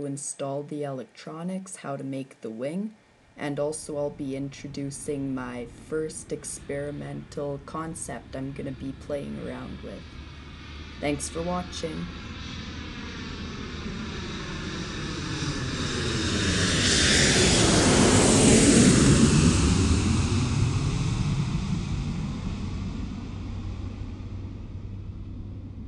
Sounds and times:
Speech: 0.0s - 10.0s, 11.0s - 12.1s
Aircraft engine: 6.6s - 25.8s.

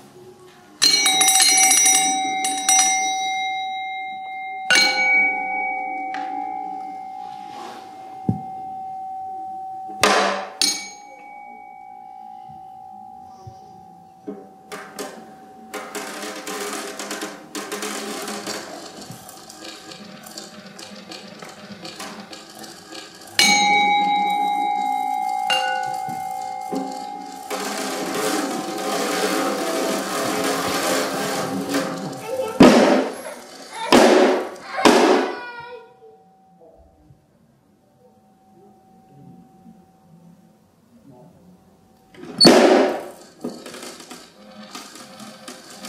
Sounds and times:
Percussion: 0.8s - 35.6s.

